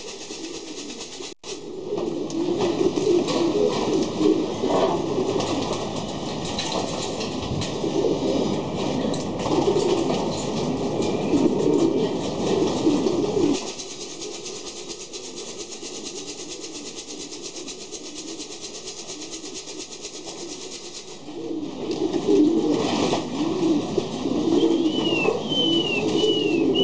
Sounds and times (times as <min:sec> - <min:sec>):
Coo: 0:00.0 - 0:06.0, 0:06.8 - 0:26.8.